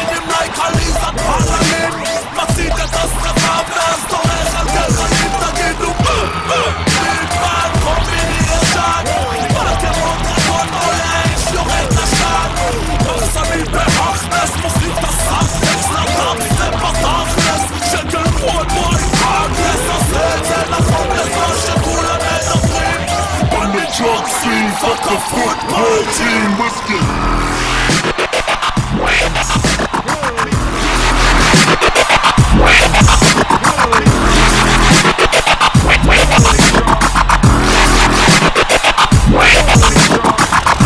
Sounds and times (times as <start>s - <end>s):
Dubstep: 0.0s - 40.8s.